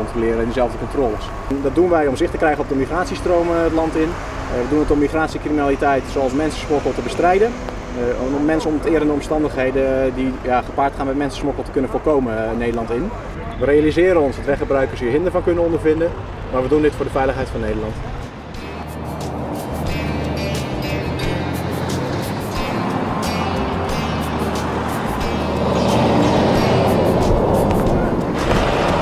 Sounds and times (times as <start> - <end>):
Speech: 0.0 - 18.3
Vehicle: 0.0 - 29.0
Music: 18.2 - 29.0.